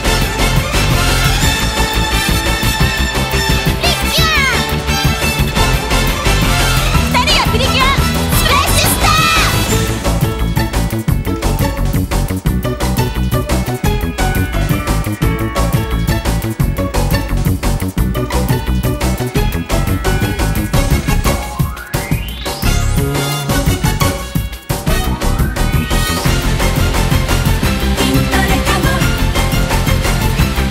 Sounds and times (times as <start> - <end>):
Music: 0.0 - 30.7.